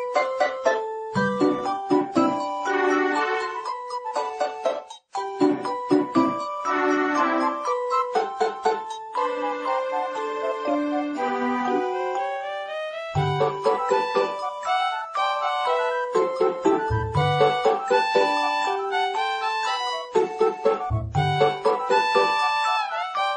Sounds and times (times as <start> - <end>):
Video game music: 0.0 - 23.3.